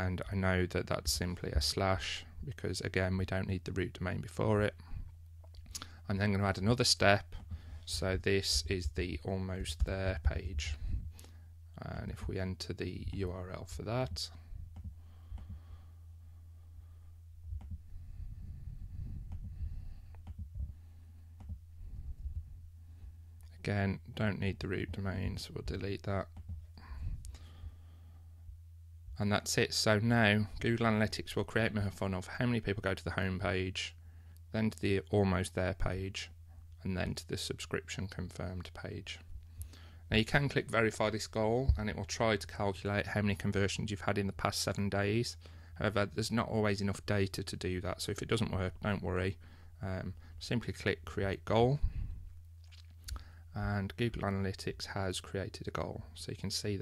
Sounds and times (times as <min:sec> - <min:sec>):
Speech: 0:00.0 - 0:04.8, 0:06.1 - 0:10.8, 0:11.8 - 0:14.4, 0:23.5 - 0:26.4, 0:29.2 - 0:39.3, 0:40.1 - 0:51.9, 0:53.6 - 0:56.8.